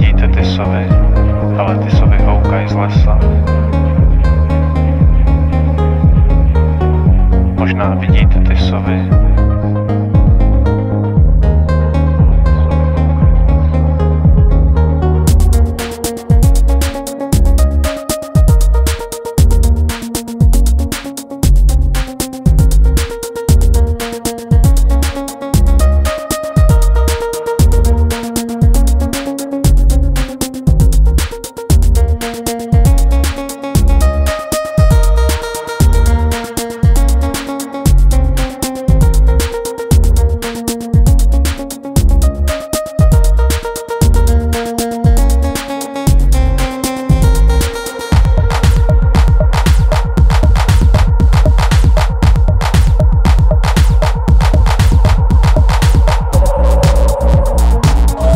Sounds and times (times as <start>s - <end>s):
Music: 0.0s - 58.3s.